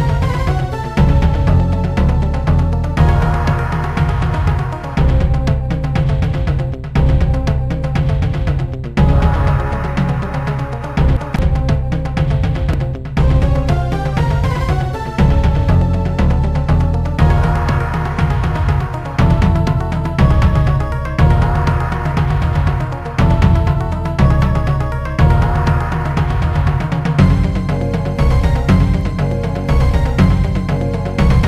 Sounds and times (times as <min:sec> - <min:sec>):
Rhythm and blues: 0:00.0 - 0:31.4.